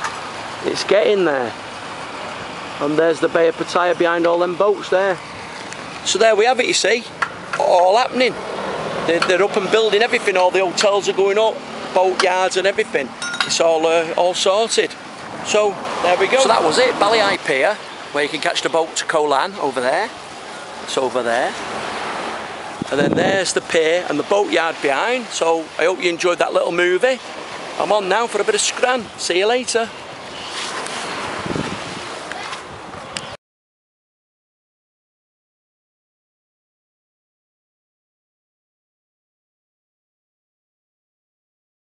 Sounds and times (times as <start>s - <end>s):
Outside, urban or manmade: 0.0s - 33.4s
Speech: 0.6s - 1.6s, 2.8s - 5.2s, 6.0s - 8.4s, 9.1s - 20.2s, 20.9s - 21.6s, 22.9s - 27.2s, 27.8s - 30.0s.